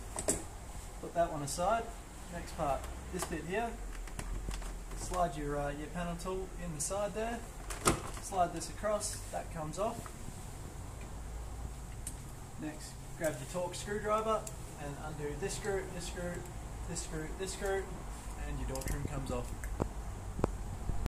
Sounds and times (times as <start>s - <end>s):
Speech: 1.0s - 3.8s, 5.0s - 7.5s, 8.2s - 10.1s, 12.6s - 19.6s.